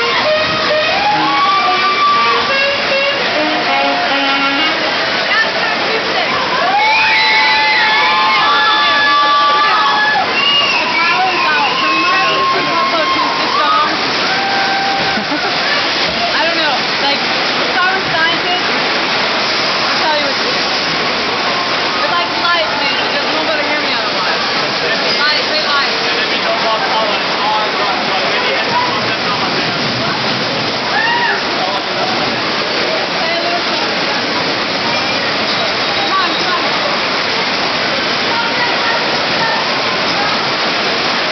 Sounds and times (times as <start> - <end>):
Rain on surface: 0.0 - 41.3.